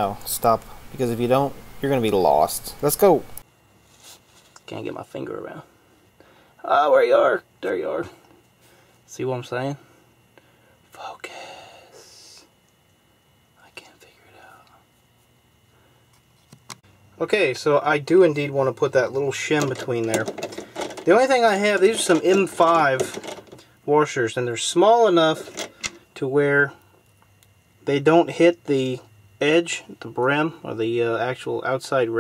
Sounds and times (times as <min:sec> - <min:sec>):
Speech: 0:00.0 - 0:03.4, 0:04.6 - 0:05.7, 0:06.6 - 0:08.2, 0:09.1 - 0:09.8, 0:17.2 - 0:20.3, 0:21.1 - 0:23.2, 0:23.9 - 0:25.5, 0:26.2 - 0:26.8, 0:27.8 - 0:32.2.